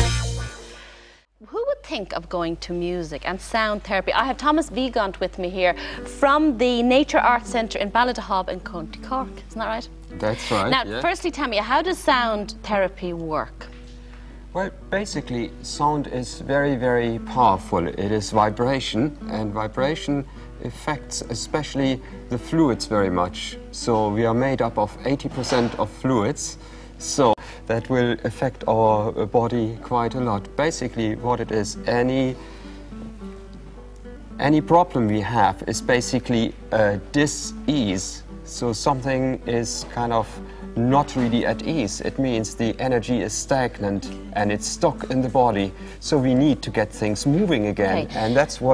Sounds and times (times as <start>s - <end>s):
Music: 0.0s - 48.7s.